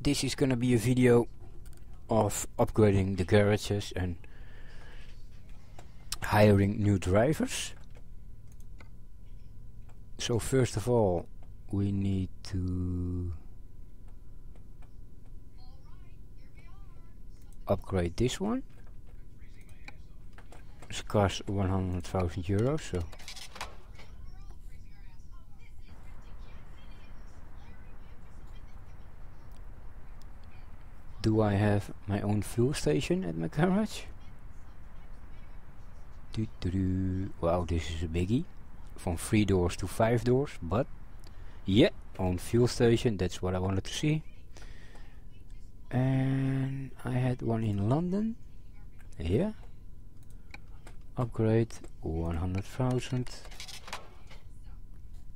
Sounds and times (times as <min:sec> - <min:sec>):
Speech: 0:00.0 - 0:01.3, 0:02.0 - 0:04.2, 0:06.1 - 0:07.8, 0:10.2 - 0:13.5, 0:15.5 - 0:23.3, 0:24.0 - 0:40.9, 0:41.6 - 0:49.7, 0:50.6 - 0:53.5.